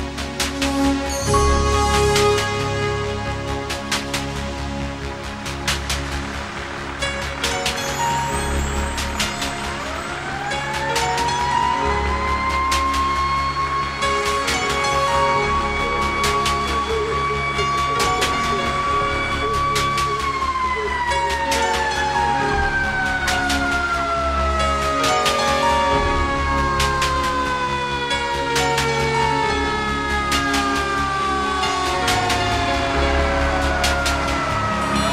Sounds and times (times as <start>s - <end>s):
Fire engine, fire truck (siren): 0.0s - 35.1s
Music: 0.0s - 35.1s.